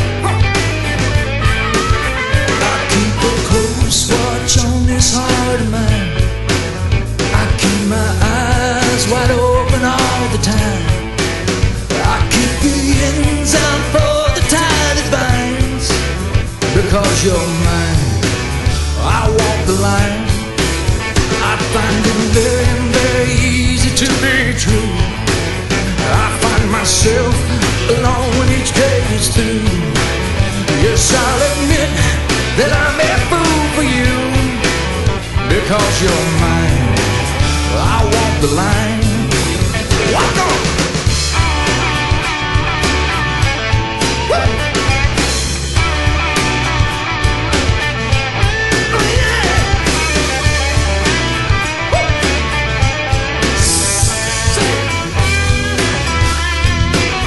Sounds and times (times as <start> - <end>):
Music: 0.0 - 57.2.